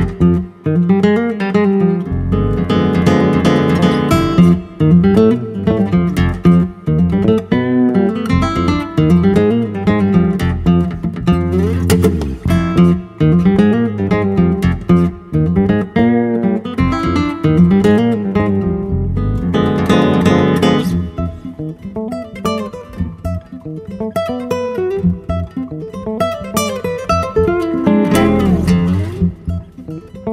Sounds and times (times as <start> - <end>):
Acoustic guitar: 0.0 - 30.3
Bass guitar: 0.0 - 30.3
Strum: 0.0 - 30.3.